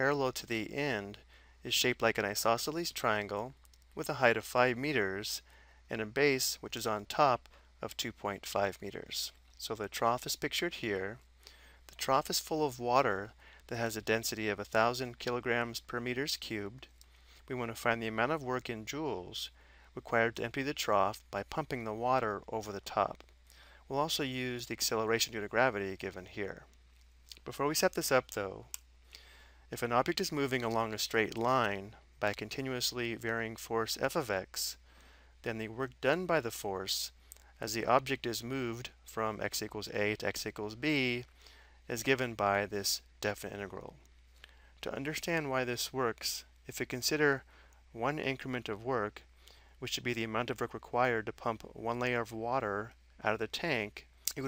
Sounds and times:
Speech: 0.0 - 11.2, 11.9 - 16.9, 17.5 - 23.2, 23.9 - 26.7, 27.3 - 28.8, 29.7 - 34.8, 35.4 - 41.3, 41.9 - 44.0, 44.8 - 54.4.

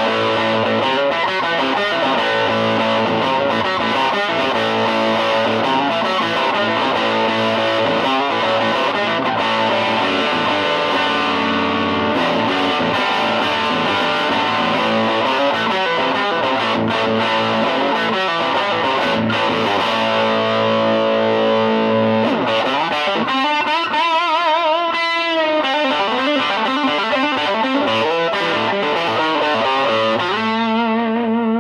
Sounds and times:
Electric guitar: 0.0 - 31.6.

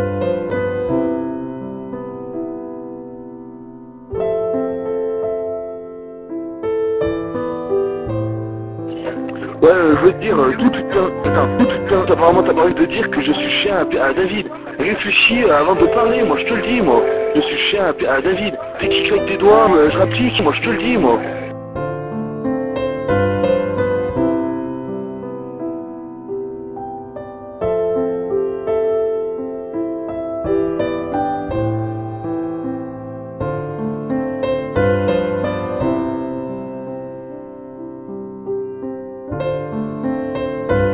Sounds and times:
Music: 0.0 - 40.9.

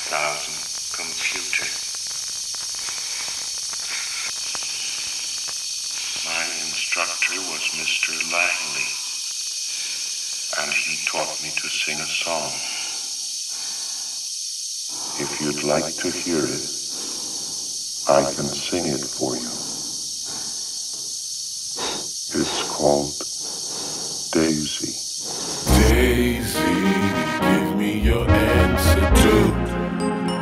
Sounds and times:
Speech: 0.0 - 1.8, 6.2 - 9.0, 10.5 - 12.8, 15.2 - 16.8, 18.1 - 19.6, 22.3 - 23.2, 24.3 - 25.0, 25.7 - 27.0, 27.7 - 29.6.

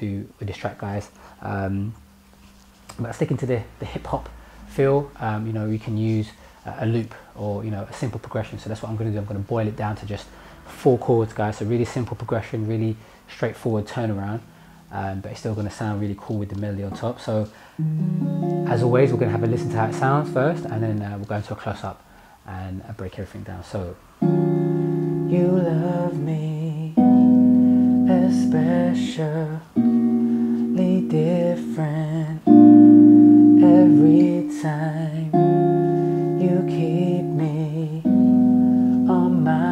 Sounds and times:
Speech: 0.0 - 2.0, 2.9 - 17.6, 18.7 - 24.0
Strum: 16.9 - 21.0, 24.2 - 39.7.

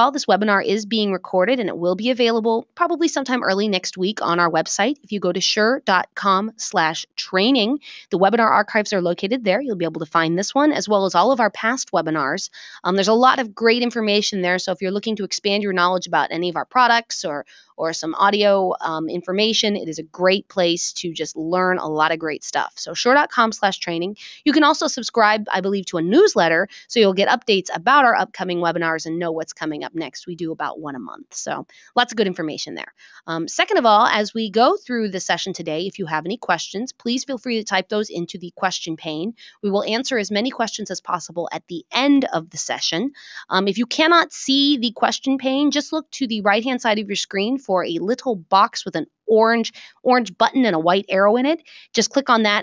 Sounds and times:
Speech: 0.0 - 52.6.

